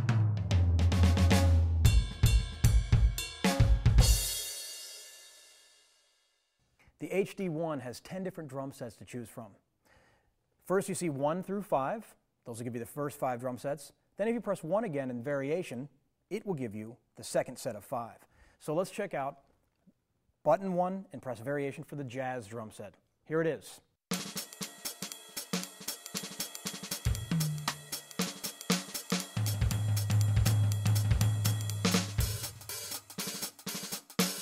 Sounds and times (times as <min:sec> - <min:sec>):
Speech: 0:07.0 - 0:09.6, 0:10.6 - 0:19.4, 0:20.4 - 0:23.9.